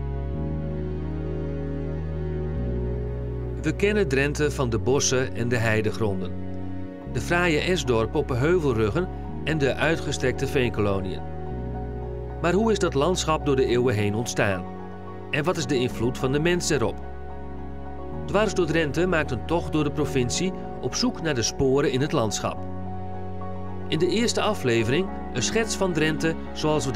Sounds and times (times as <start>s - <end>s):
Music: 0.0s - 26.9s
Speech: 3.6s - 6.3s, 7.2s - 11.2s, 12.4s - 14.6s, 15.3s - 17.0s, 18.3s - 22.6s, 23.9s - 26.9s.